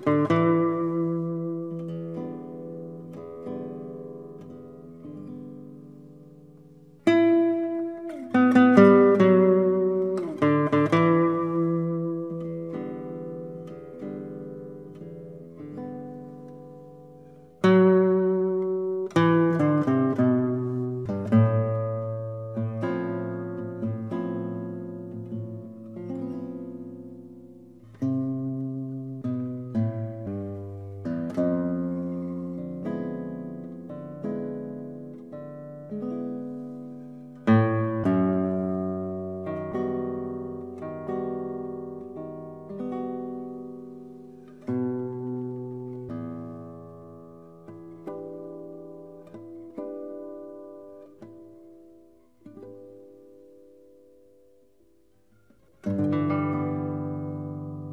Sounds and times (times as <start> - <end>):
Guitar: 0.0 - 57.9.